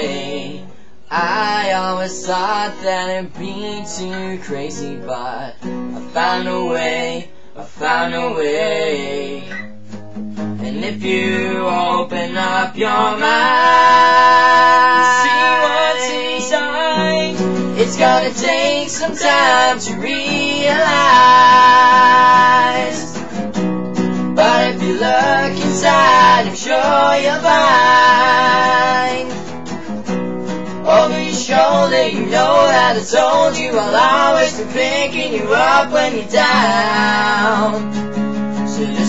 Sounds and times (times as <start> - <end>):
Music: 0.0 - 39.0.